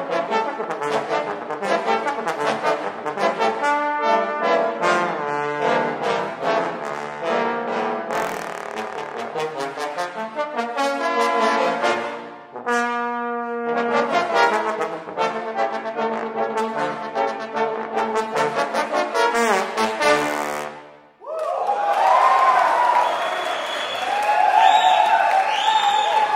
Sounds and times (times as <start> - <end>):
Trombone: 0.0 - 21.0.